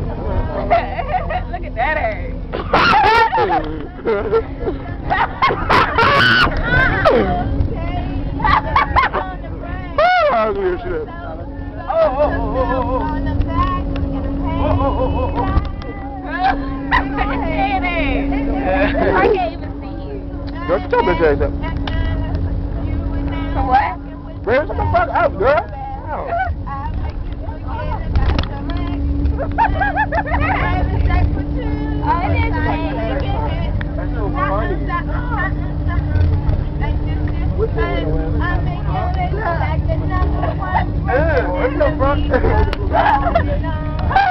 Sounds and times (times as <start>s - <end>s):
Bus: 0.0s - 44.3s.